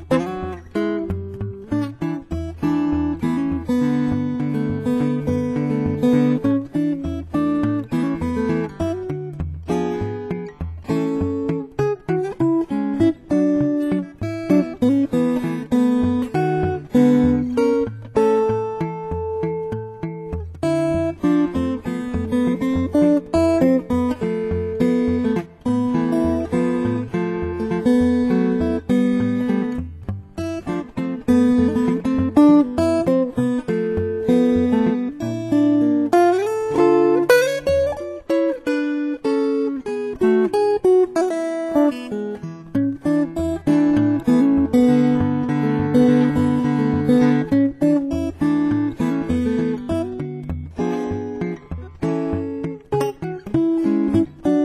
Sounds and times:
Guitar: 0:00.0 - 0:54.6.

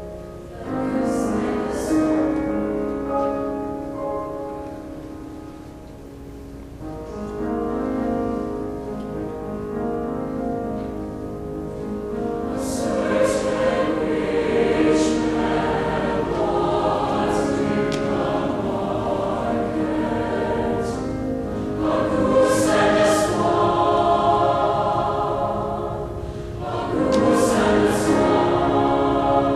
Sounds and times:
Music: 0:00.0 - 0:29.5.

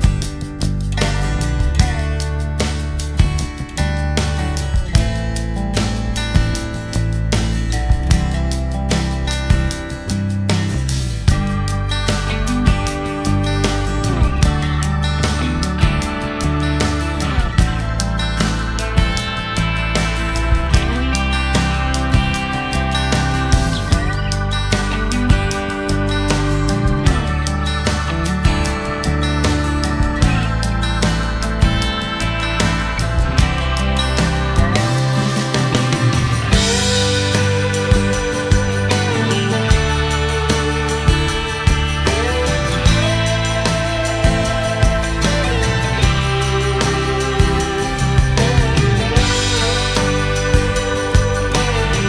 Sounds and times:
Music: 0:00.0 - 0:52.0.

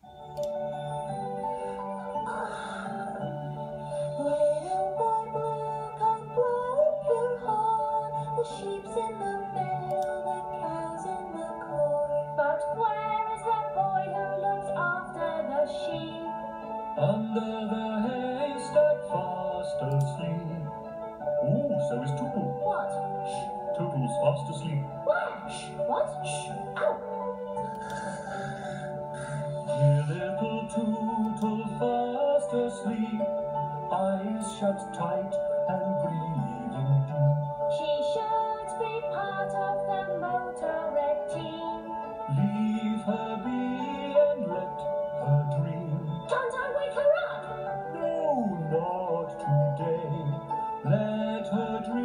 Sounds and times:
Soundtrack music: 0:00.0 - 0:52.0.

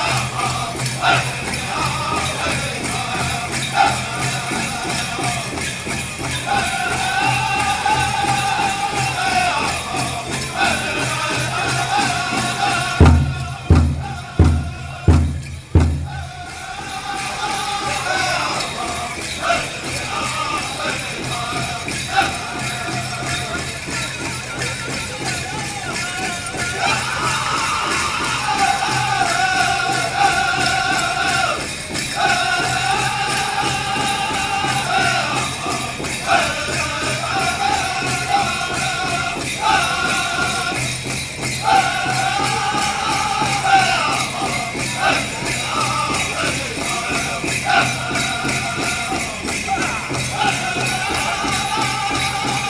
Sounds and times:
Music: 0:00.0 - 0:52.6.

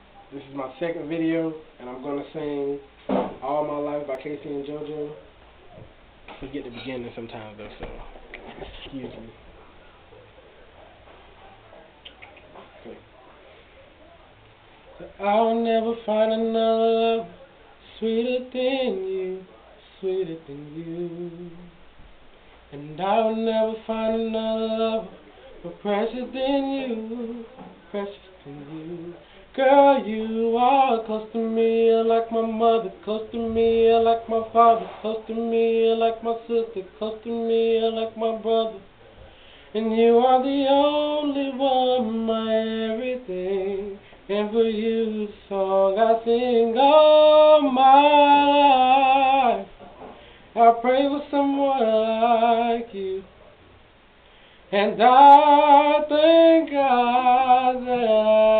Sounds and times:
Male singing: 0:00.3 - 0:05.2, 0:14.9 - 0:21.8, 0:22.7 - 0:38.9, 0:39.7 - 0:49.8, 0:50.5 - 0:53.3, 0:54.7 - 0:58.5.

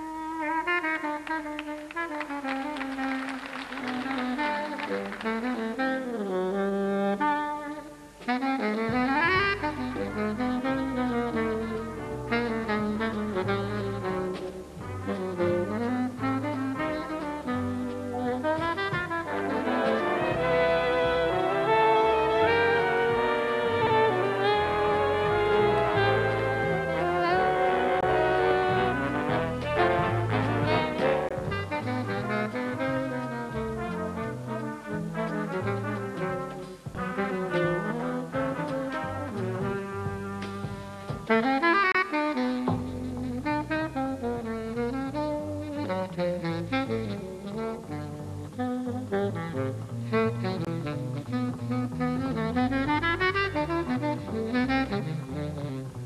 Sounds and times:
Drum kit: 0:00.0 - 0:56.0
Saxophone: 0:00.0 - 0:56.0
Trombone: 0:00.0 - 0:56.0
Trumpet: 0:00.0 - 0:56.0.

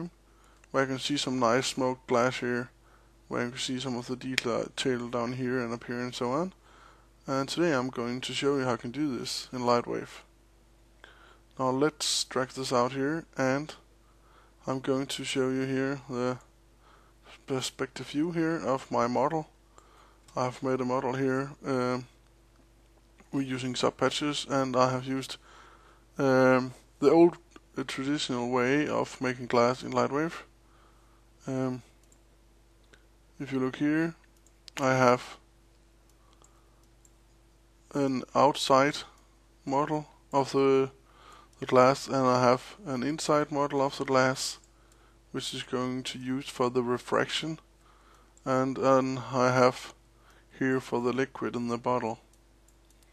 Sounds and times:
Speech: 0:00.0 - 0:06.6, 0:07.2 - 0:10.3, 0:11.6 - 0:13.9, 0:14.6 - 0:16.5, 0:17.3 - 0:19.6, 0:20.3 - 0:22.2, 0:23.2 - 0:25.4, 0:26.2 - 0:30.5, 0:31.4 - 0:31.9, 0:33.4 - 0:35.5, 0:37.9 - 0:41.0, 0:41.6 - 0:44.6, 0:45.3 - 0:47.7, 0:48.4 - 0:52.3.

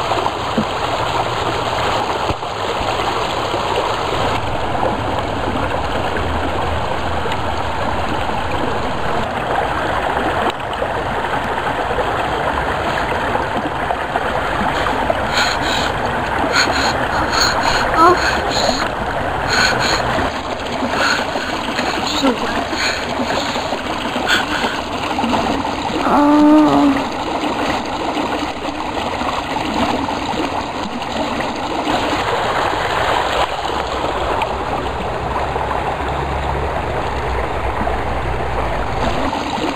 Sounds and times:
Stream: 0:00.0 - 0:39.7.

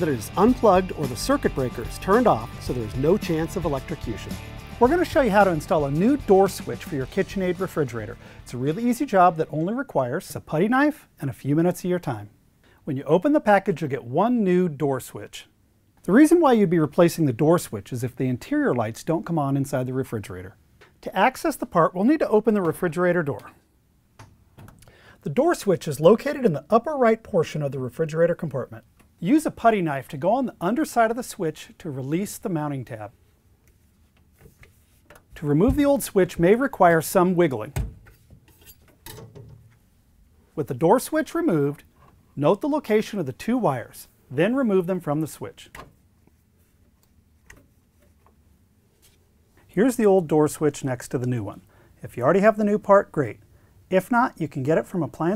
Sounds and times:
Speech: 0:00.0 - 0:23.6, 0:25.2 - 0:33.2, 0:35.4 - 0:37.8, 0:40.6 - 0:45.8, 0:49.7 - 0:55.3.

